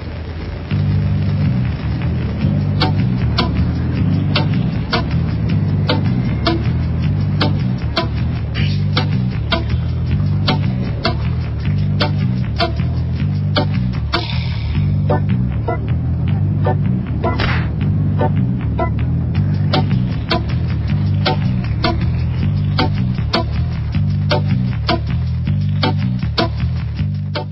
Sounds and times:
Music: 0.7s - 27.5s.

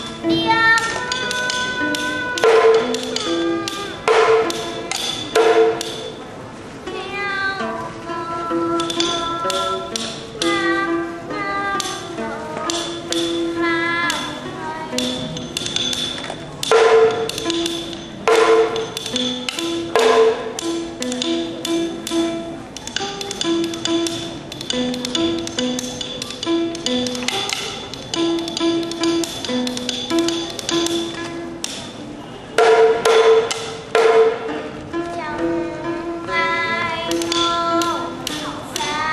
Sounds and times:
Folk music: 0.0s - 39.1s.

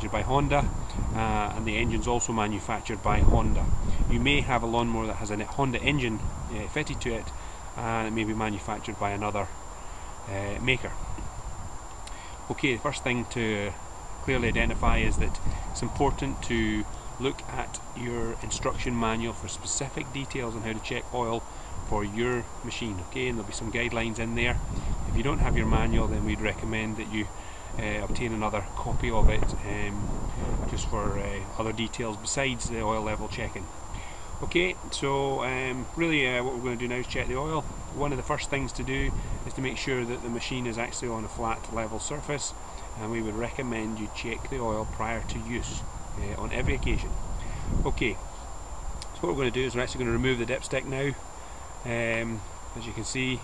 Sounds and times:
Speech: 0.0s - 9.6s, 10.3s - 11.0s, 12.4s - 33.7s, 34.4s - 47.2s, 47.8s - 48.2s, 49.0s - 51.2s, 51.8s - 53.4s.

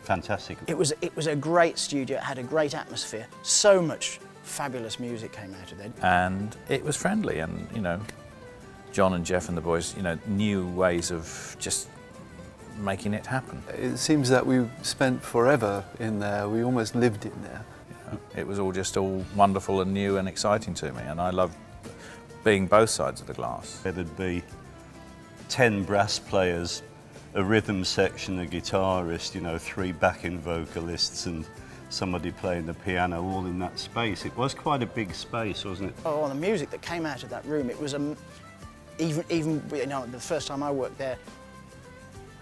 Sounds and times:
Speech: 0.0s - 8.1s, 9.0s - 11.9s, 12.8s - 21.5s, 22.4s - 24.5s, 25.5s - 26.8s, 27.4s - 38.2s, 39.0s - 41.2s
Music: 0.0s - 42.4s.

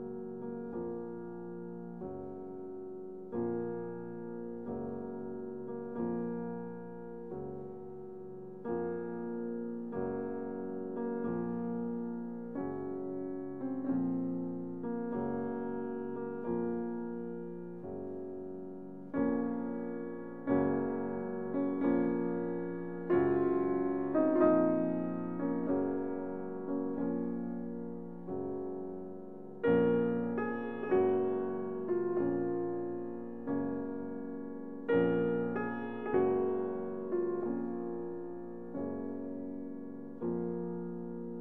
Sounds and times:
Music: 0.0s - 41.4s.

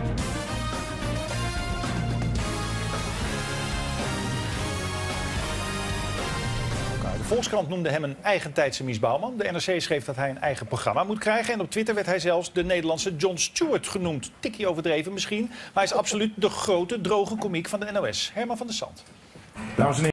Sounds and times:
Speech: 7.2s - 19.1s, 19.8s - 20.1s.

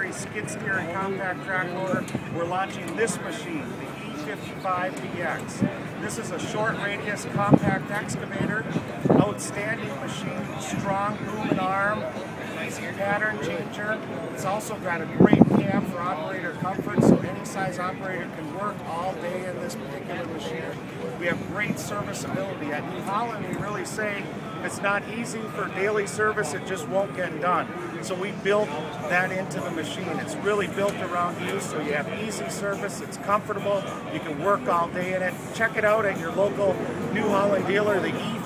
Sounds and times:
Speech: 0.0s - 38.4s.

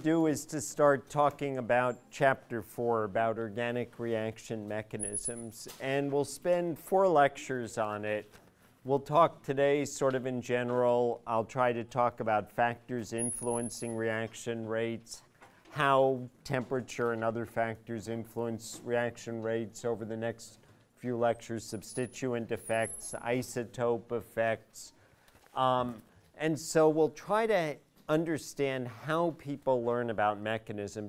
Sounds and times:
Speech: 0.0s - 25.0s, 25.6s - 31.0s.

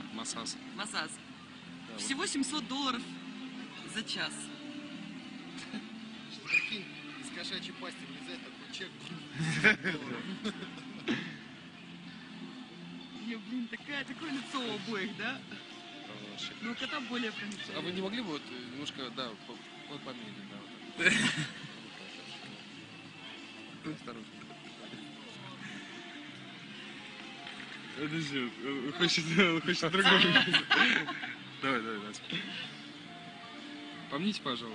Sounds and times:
Music: 0.0s - 34.7s.

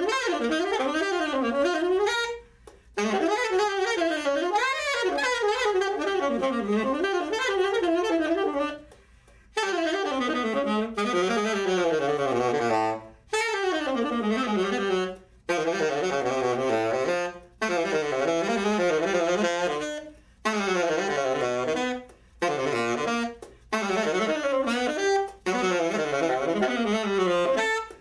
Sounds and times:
Brass instrument: 0.0s - 28.0s
Saxophone: 0.0s - 28.0s.

